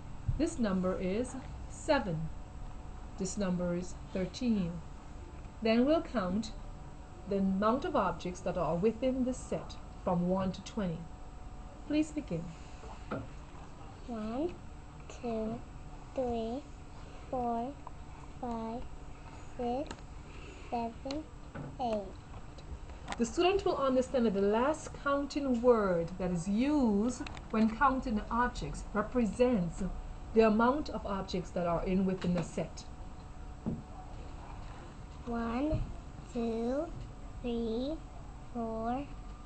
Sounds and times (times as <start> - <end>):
Speech: 0.4 - 2.3, 3.2 - 4.8, 5.6 - 6.6, 7.3 - 11.1, 11.9 - 12.5, 14.0 - 15.6, 16.2 - 16.7, 17.3 - 17.8, 18.4 - 18.9, 19.6 - 19.9, 23.2 - 32.9, 35.2 - 38.0, 38.6 - 39.1.